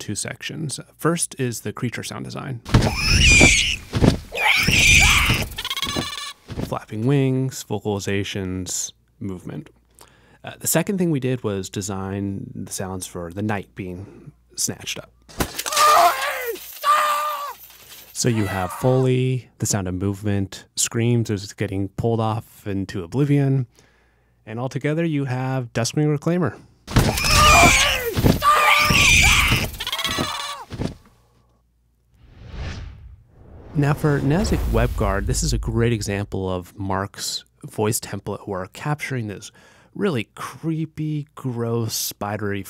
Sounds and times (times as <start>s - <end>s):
Speech: 0.0s - 2.7s, 6.7s - 9.8s, 10.4s - 15.1s, 18.2s - 23.7s, 24.5s - 26.6s, 33.8s - 42.7s.